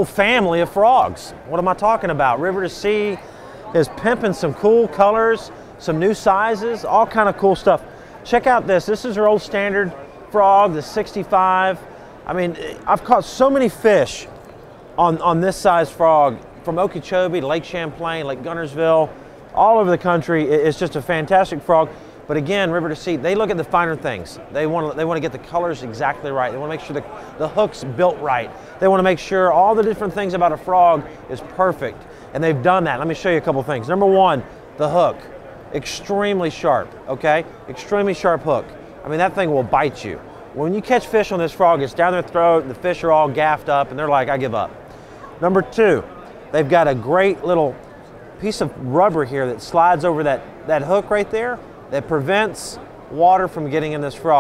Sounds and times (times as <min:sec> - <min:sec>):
Speech: 0:00.0 - 0:14.3, 0:15.0 - 0:44.8, 0:45.4 - 0:54.4.